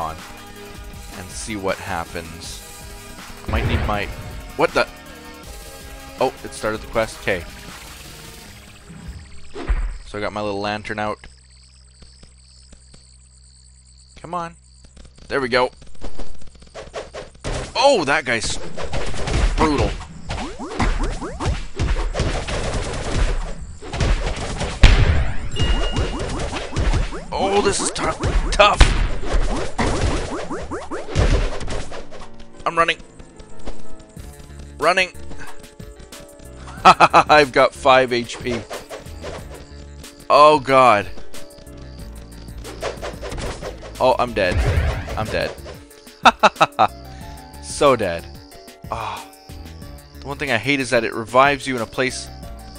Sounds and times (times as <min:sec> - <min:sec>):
Whack, thwack: 0:18.9 - 0:20.1, 0:20.8 - 0:27.2, 0:28.0 - 0:30.4, 0:31.1 - 0:32.0, 0:42.8 - 0:43.7, 0:44.5 - 0:45.2.